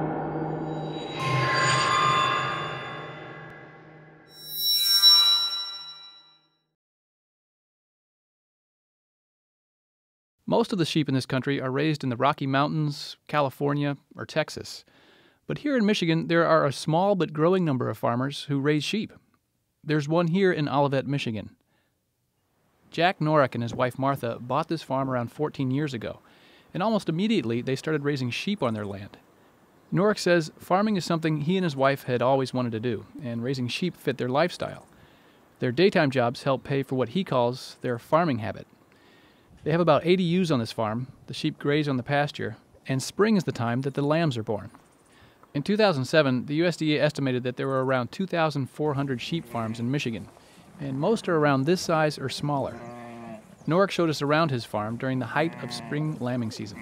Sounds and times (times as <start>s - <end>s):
Speech: 10.5s - 14.9s, 15.5s - 19.2s, 19.8s - 21.6s, 22.9s - 29.2s, 29.9s - 34.9s, 35.6s - 38.7s, 39.6s - 44.8s, 45.6s - 52.8s, 53.7s - 56.8s.